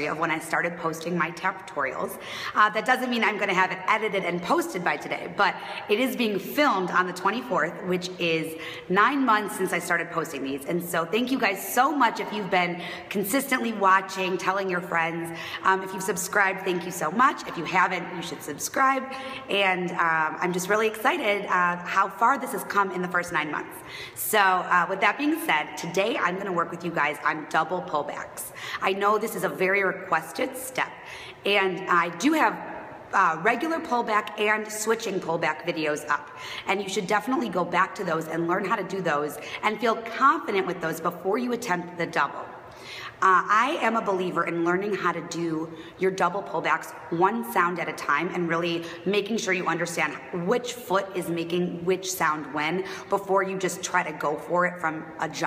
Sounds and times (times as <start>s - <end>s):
Female speech, woman speaking: 0.0s - 30.9s, 31.5s - 42.4s, 43.2s - 55.4s.